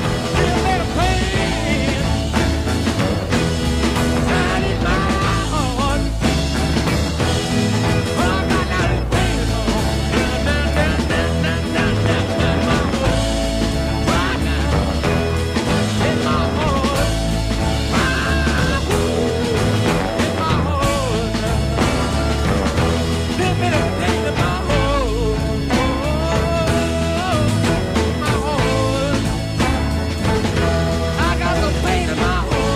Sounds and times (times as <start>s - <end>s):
Psychedelic rock: 0.0s - 32.7s.